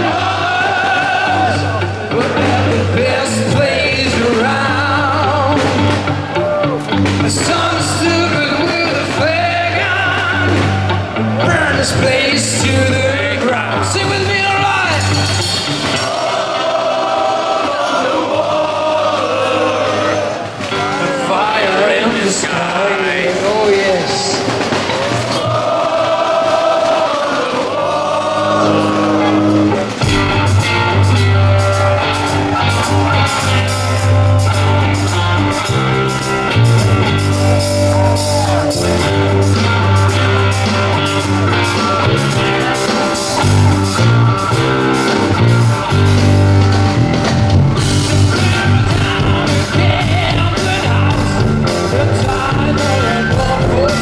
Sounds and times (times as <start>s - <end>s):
Music: 0.0s - 54.0s.